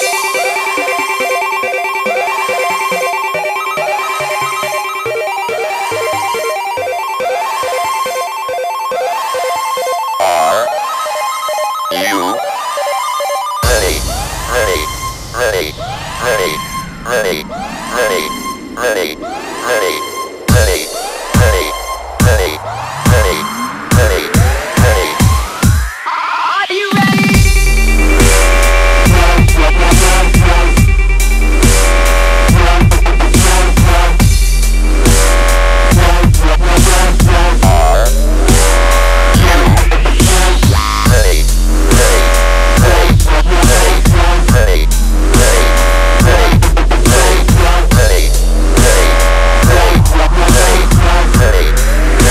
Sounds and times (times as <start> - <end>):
Dubstep: 9.6 - 10.8, 11.9 - 52.3.